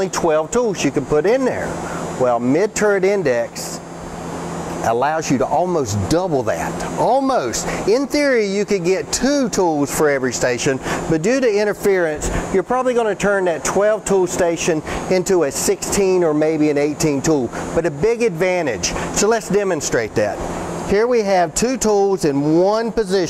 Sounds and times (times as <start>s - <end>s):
Speech: 0.0s - 3.8s, 4.8s - 23.2s.